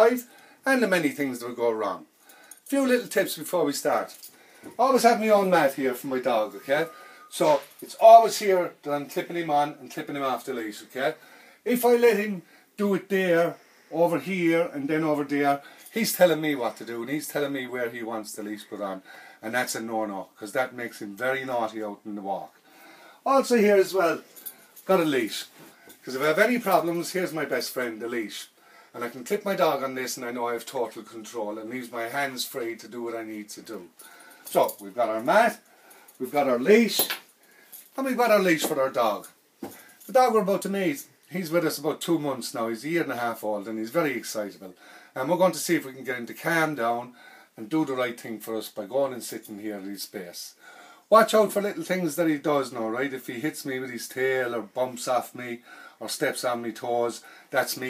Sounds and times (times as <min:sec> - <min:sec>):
Speech: 0:00.0 - 0:02.1, 0:02.7 - 0:22.6, 0:23.2 - 0:33.9, 0:34.5 - 0:35.6, 0:36.2 - 0:37.2, 0:38.0 - 0:39.4, 0:40.1 - 0:57.9.